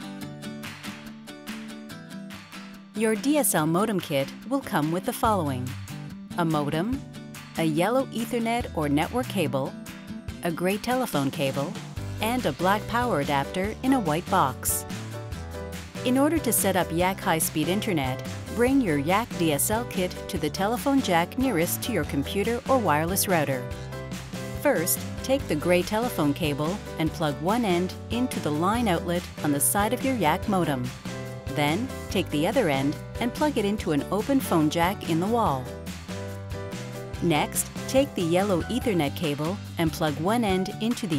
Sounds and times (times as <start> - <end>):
Music: 0.0 - 41.1
Speech: 3.0 - 5.7, 6.4 - 7.0, 7.6 - 9.7, 10.4 - 14.8, 16.1 - 23.6, 24.6 - 30.9, 31.5 - 35.7, 37.2 - 41.1.